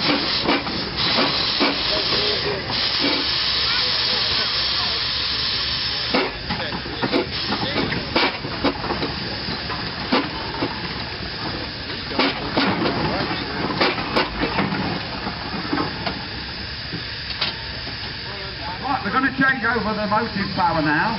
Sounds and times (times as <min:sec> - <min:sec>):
Hiss: 0:00.0 - 0:12.6.